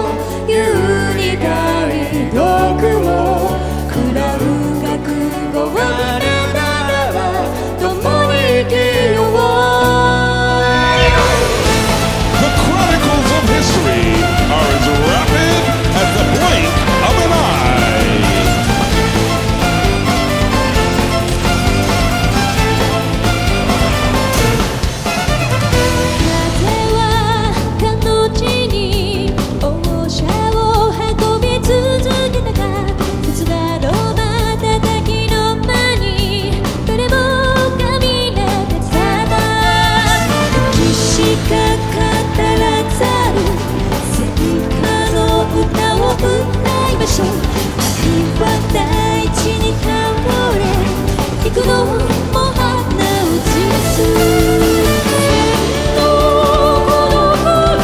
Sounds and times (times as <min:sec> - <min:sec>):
Music: 0:00.0 - 0:57.8.